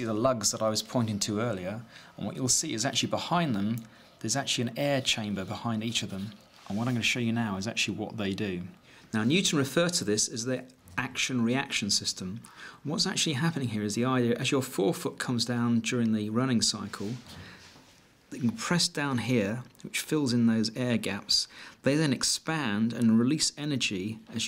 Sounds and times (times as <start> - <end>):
Speech: 0.0 - 17.3, 18.3 - 24.4.